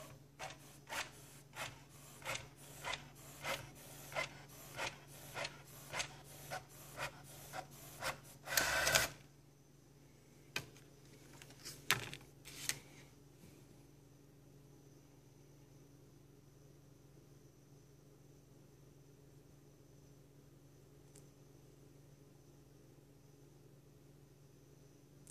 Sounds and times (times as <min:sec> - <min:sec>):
Printer: 0:00.0 - 0:09.2.